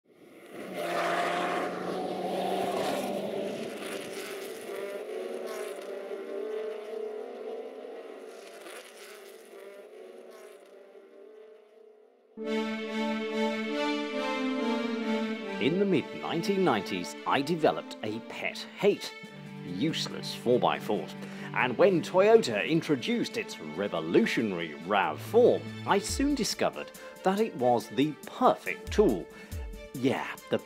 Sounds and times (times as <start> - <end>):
Race car, auto racing: 0.1 - 12.3.